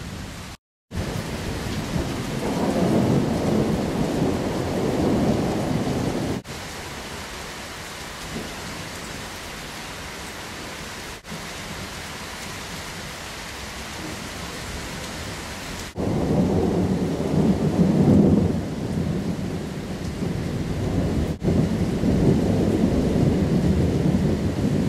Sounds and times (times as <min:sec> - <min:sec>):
Thunder: 0:00.9 - 0:06.5, 0:15.9 - 0:24.8.